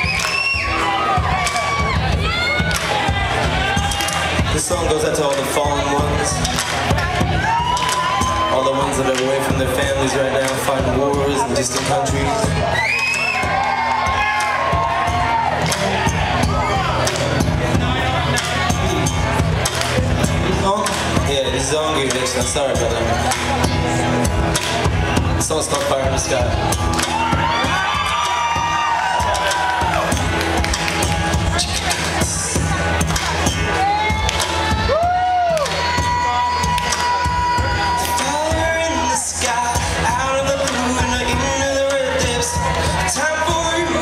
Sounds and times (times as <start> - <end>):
Music: 0.0 - 44.0
Speech: 4.5 - 7.2, 8.5 - 12.6, 20.4 - 23.7, 25.3 - 26.6.